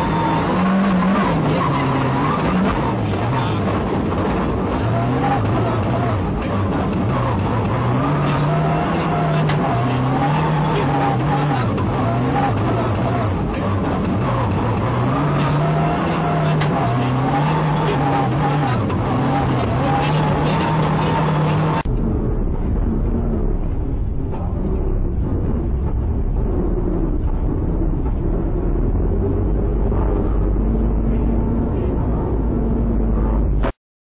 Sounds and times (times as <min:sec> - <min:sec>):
Car: 0:00.0 - 0:33.8.